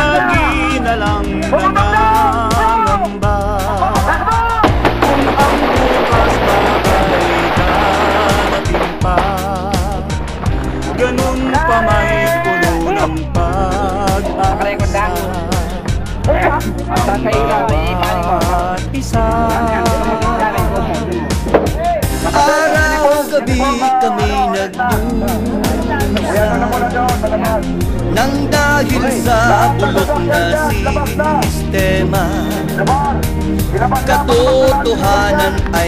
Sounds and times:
Speech: 0.0 - 3.1, 11.0 - 13.3, 14.1 - 15.4, 16.3 - 18.7, 21.8 - 27.6, 33.8 - 35.8
Music: 0.0 - 35.8.

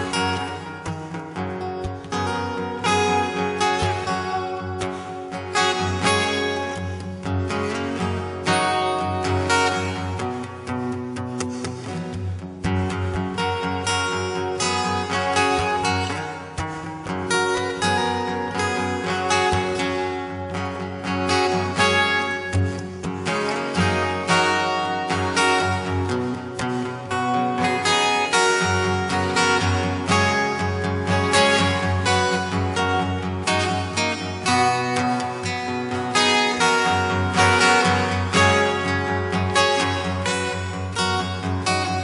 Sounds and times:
Acoustic guitar: 0.0 - 42.0
Strum: 0.0 - 42.0.

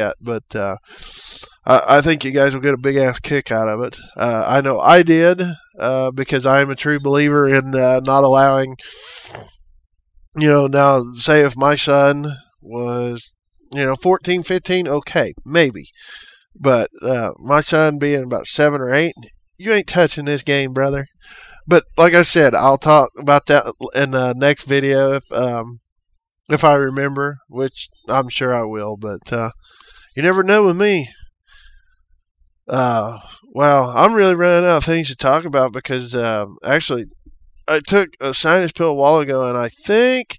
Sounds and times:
Speech: 0.0 - 9.5, 10.4 - 25.8, 26.5 - 29.6, 30.2 - 31.2, 32.7 - 40.3.

